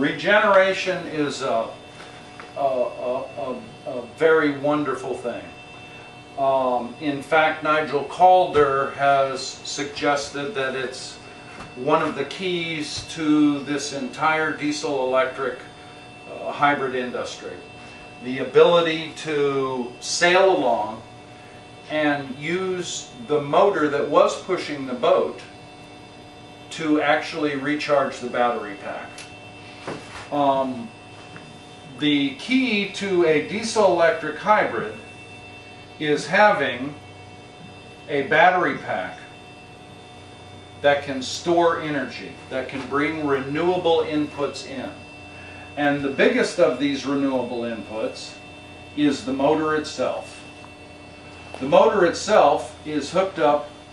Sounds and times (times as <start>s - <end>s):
Speech: 0.0s - 1.8s, 2.6s - 5.5s, 6.4s - 11.2s, 11.8s - 15.7s, 16.3s - 21.1s, 21.9s - 25.5s, 26.7s - 29.2s, 30.3s - 30.9s, 31.9s - 35.1s, 36.0s - 37.0s, 38.1s - 39.3s, 40.8s - 45.0s, 45.8s - 48.4s, 49.0s - 50.4s, 51.6s - 53.7s.